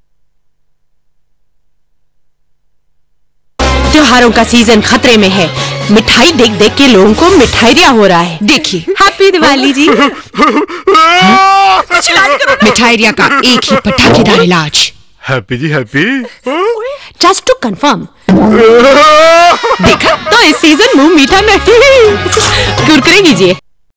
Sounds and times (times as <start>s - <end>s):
Music: 3.6s - 8.5s, 20.5s - 23.6s.